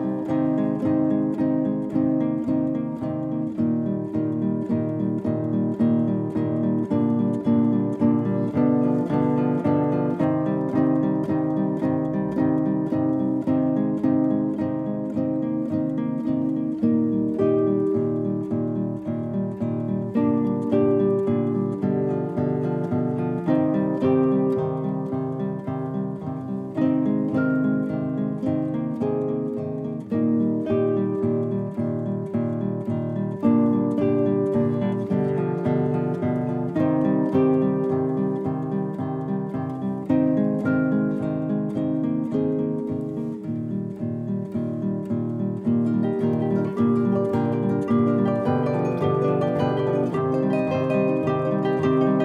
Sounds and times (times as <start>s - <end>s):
Acoustic guitar: 0.0s - 52.2s
Strum: 0.0s - 52.2s.